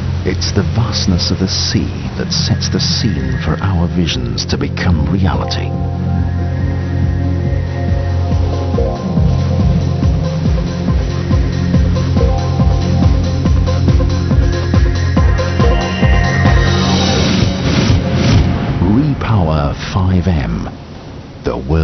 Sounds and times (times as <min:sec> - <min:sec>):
Music: 0:00.0 - 0:18.9.